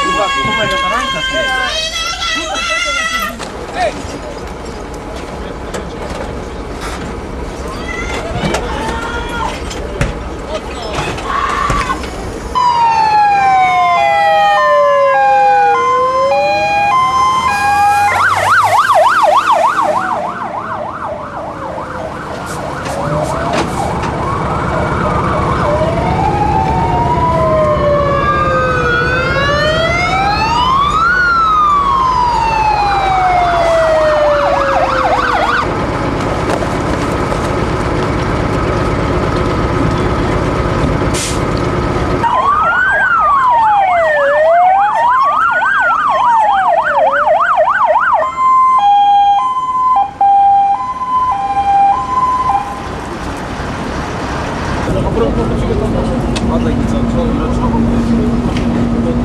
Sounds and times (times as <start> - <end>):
Fire engine, fire truck (siren): 0.0 - 3.2, 12.5 - 35.8, 42.2 - 54.6.